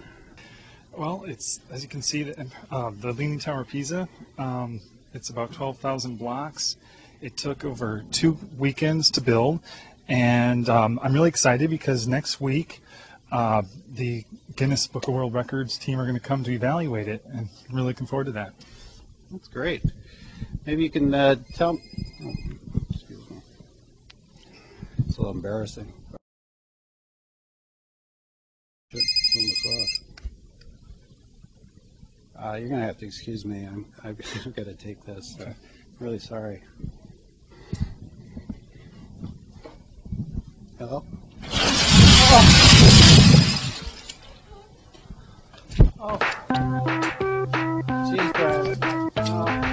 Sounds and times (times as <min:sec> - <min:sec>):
Speech: 0:01.0 - 0:18.6, 0:19.3 - 0:19.9, 0:20.6 - 0:23.5, 0:25.1 - 0:26.0, 0:32.4 - 0:36.7, 0:40.8 - 0:41.1, 0:46.0 - 0:46.2, 0:48.0 - 0:49.6.